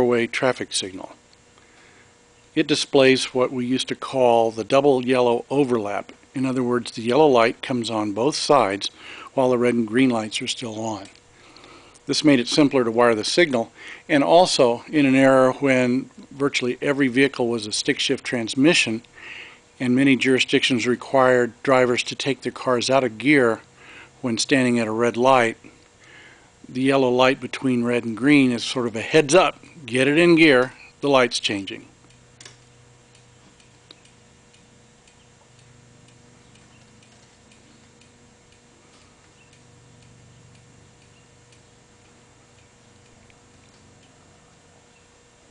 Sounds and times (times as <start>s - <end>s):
Speech: 0.0s - 1.2s, 2.6s - 11.2s, 12.1s - 19.1s, 19.8s - 25.6s, 26.7s - 31.9s.